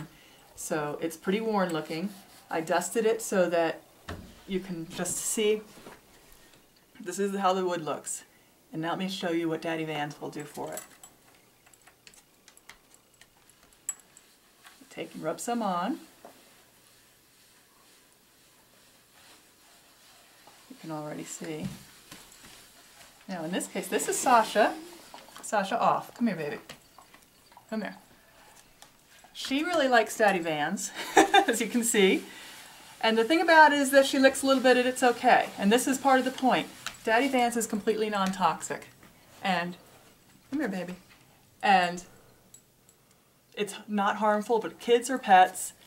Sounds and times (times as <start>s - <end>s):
Speech: 0.0s - 3.8s, 4.5s - 5.7s, 7.0s - 10.8s, 14.9s - 16.1s, 20.7s - 21.8s, 23.3s - 26.6s, 27.7s - 28.0s, 29.4s - 32.3s, 33.0s - 39.8s, 40.5s - 41.0s, 41.6s - 42.1s, 43.6s - 45.8s.